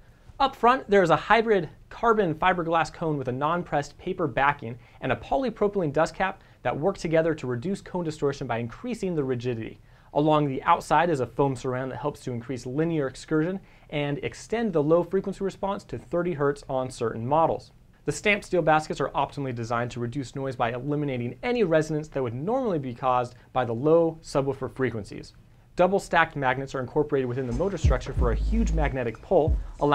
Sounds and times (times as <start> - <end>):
Speech: 0.4 - 29.9.